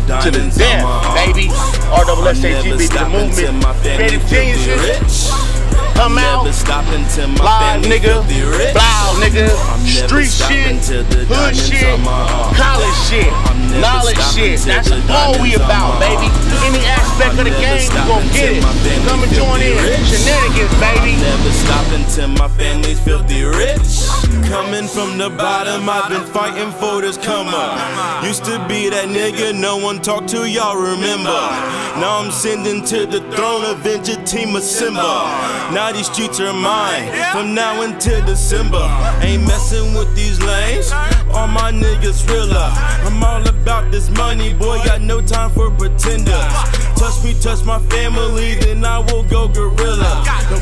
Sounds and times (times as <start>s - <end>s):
Music: 0.0s - 50.6s
Speech: 0.1s - 4.9s, 6.0s - 6.6s, 8.8s - 21.9s.